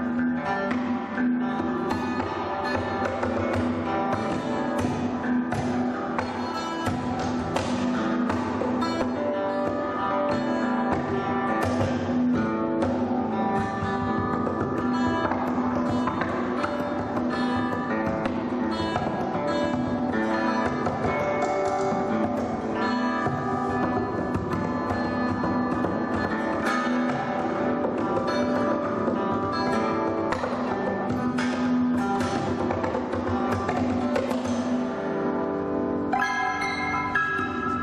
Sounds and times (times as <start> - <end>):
Acoustic guitar: 0.0 - 37.8
Strum: 0.0 - 37.8.